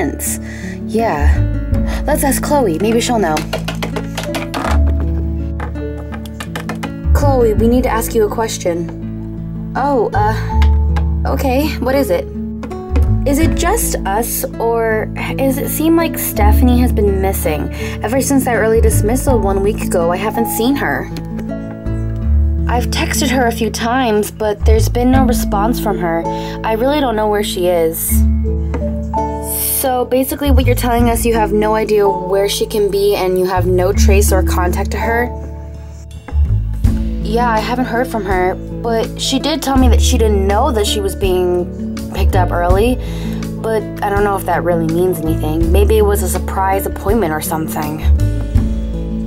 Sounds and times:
Speech: 0:00.0 - 0:01.4, 0:02.0 - 0:03.5, 0:07.2 - 0:08.9, 0:09.8 - 0:10.5, 0:11.3 - 0:12.2, 0:13.3 - 0:21.1, 0:22.7 - 0:28.2, 0:29.4 - 0:35.3, 0:37.3 - 0:43.0, 0:43.6 - 0:48.1
Music: 0:00.0 - 0:49.2.

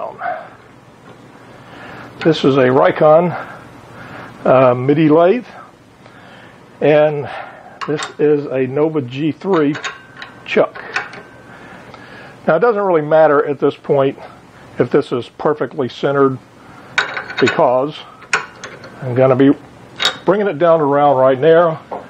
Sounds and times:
Speech: 0:00.0 - 0:00.3, 0:02.2 - 0:03.5, 0:04.4 - 0:05.7, 0:06.8 - 0:09.8, 0:10.5 - 0:10.9, 0:12.5 - 0:16.4, 0:17.4 - 0:18.1, 0:19.0 - 0:19.6, 0:20.2 - 0:21.9
Tools: 0:09.5 - 0:11.3, 0:17.0 - 0:19.0, 0:20.0 - 0:20.3.

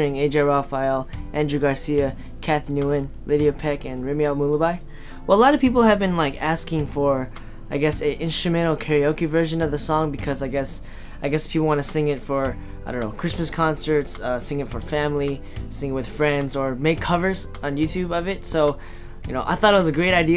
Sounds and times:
Music: 0:00.0 - 0:20.3
Speech: 0:00.0 - 0:20.3.

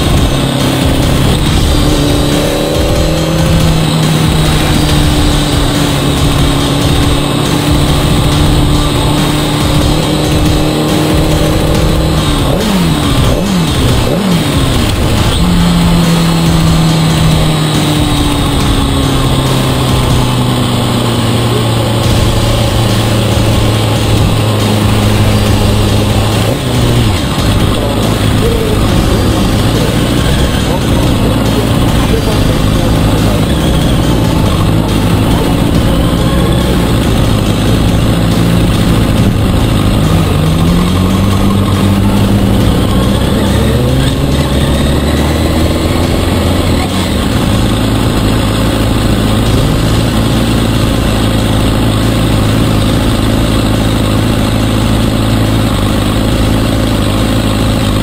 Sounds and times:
Race car, auto racing: 0:00.0 - 0:58.0.

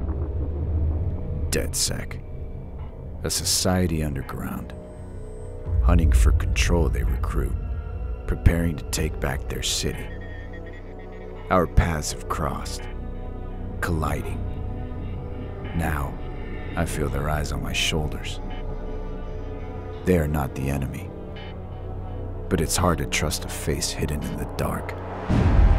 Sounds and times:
Music: 0:00.0 - 0:25.7
Speech: 0:01.5 - 0:02.2, 0:03.2 - 0:04.8, 0:05.7 - 0:07.6, 0:08.3 - 0:10.2, 0:11.5 - 0:12.9, 0:13.8 - 0:14.4, 0:15.7 - 0:16.2, 0:16.8 - 0:18.4, 0:20.0 - 0:21.1, 0:22.5 - 0:25.0.

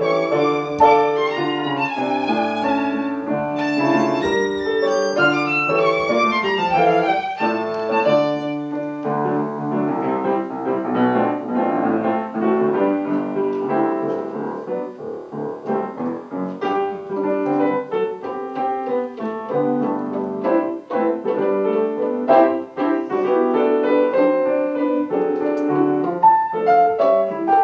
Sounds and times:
Classical music: 0:00.0 - 0:27.6
Piano: 0:00.0 - 0:27.6.

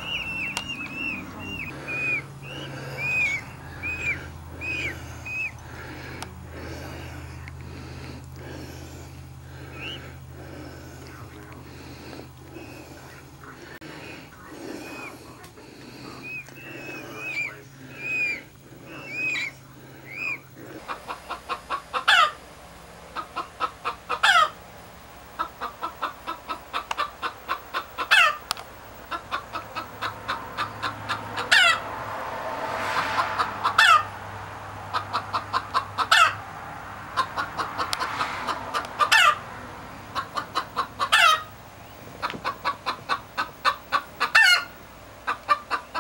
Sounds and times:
Chicken, rooster: 0:00.0 - 0:05.5, 0:16.1 - 0:22.4, 0:23.2 - 0:24.6, 0:25.4 - 0:28.5, 0:29.1 - 0:31.9, 0:33.0 - 0:34.2, 0:34.9 - 0:36.4, 0:37.2 - 0:39.5, 0:40.1 - 0:41.6, 0:42.2 - 0:46.0
Speech: 0:12.9 - 0:20.8.

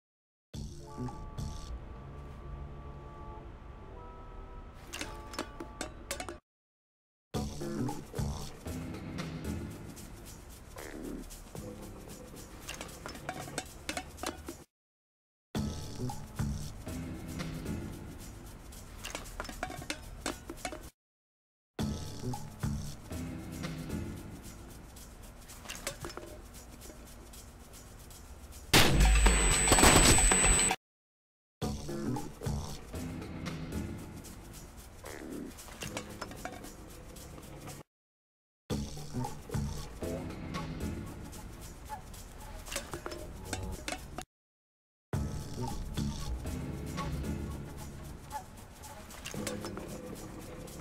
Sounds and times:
Music: 0:00.7 - 0:03.5, 0:07.4 - 0:14.6, 0:15.6 - 0:18.8, 0:21.8 - 0:25.1, 0:31.6 - 0:34.8, 0:38.7 - 0:44.0, 0:45.2 - 0:50.8.

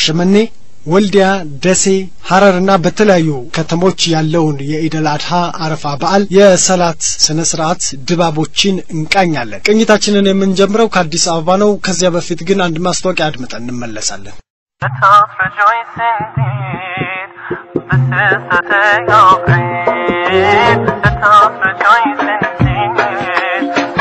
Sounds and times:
Speech: 0:00.0 - 0:15.7
Music: 0:14.8 - 0:24.0.

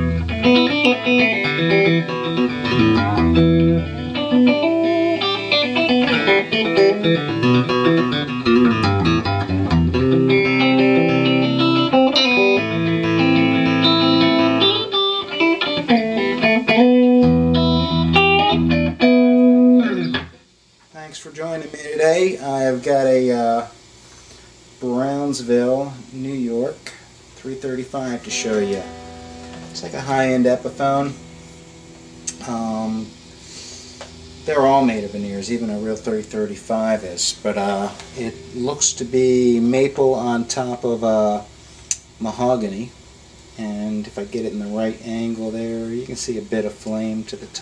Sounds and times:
Electric guitar: 0:00.0 - 0:20.9, 0:28.1 - 0:43.8.

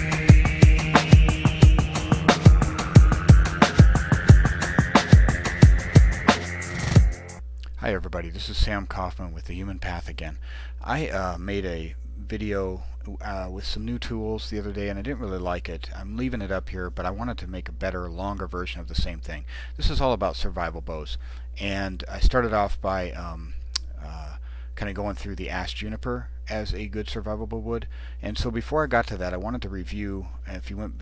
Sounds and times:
Speech: 0:07.6 - 0:31.0.

